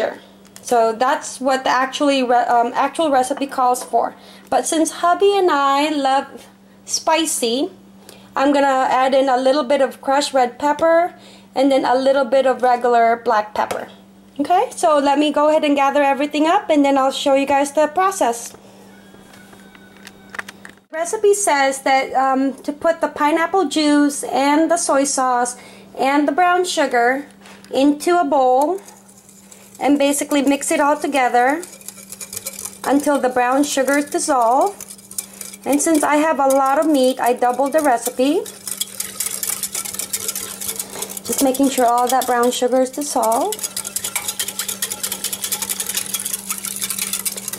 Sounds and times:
Speech: 0.0 - 7.8, 8.4 - 18.6, 20.9 - 28.8, 29.8 - 31.7, 32.8 - 34.8, 35.6 - 38.5, 41.3 - 43.6.

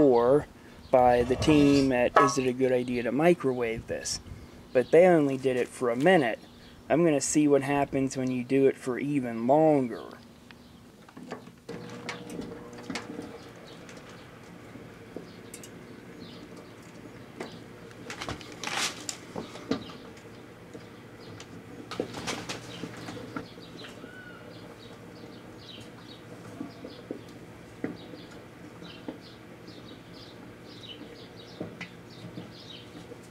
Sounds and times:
Speech: 0.0 - 4.2, 4.8 - 10.2.

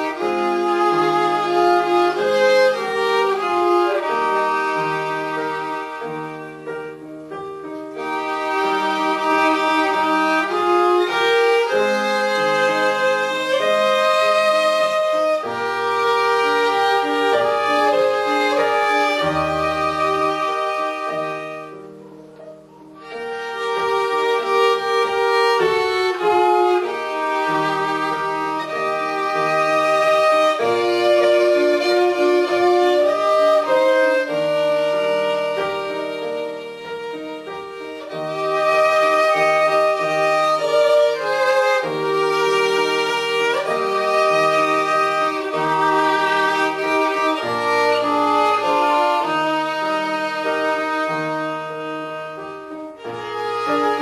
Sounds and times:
Violin, fiddle: 0.0 - 54.0.

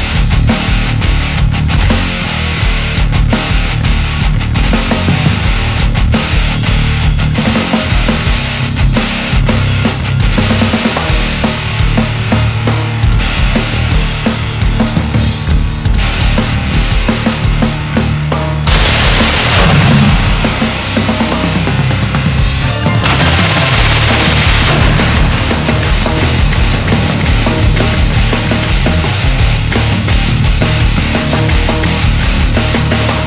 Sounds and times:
Music: 0.0 - 33.2.

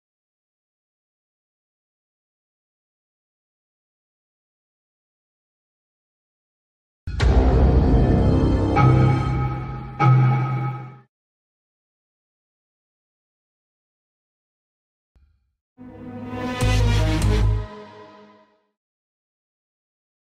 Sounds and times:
Music: 7.1 - 11.1, 15.8 - 18.8.

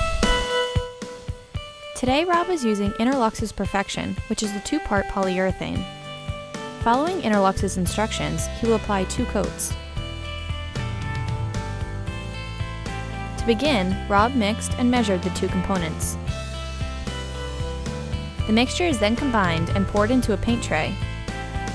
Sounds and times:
Music: 0.0 - 21.7
Speech: 2.0 - 5.8, 6.8 - 9.8, 13.4 - 16.2, 18.5 - 21.0.

